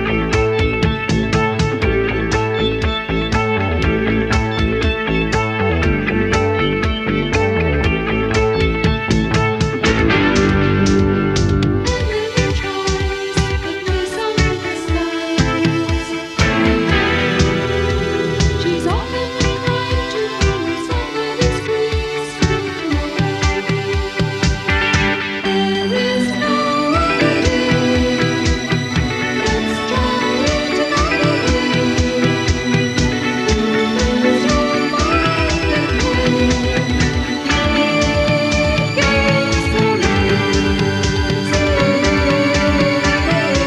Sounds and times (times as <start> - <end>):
Psychedelic rock: 0.0 - 43.6.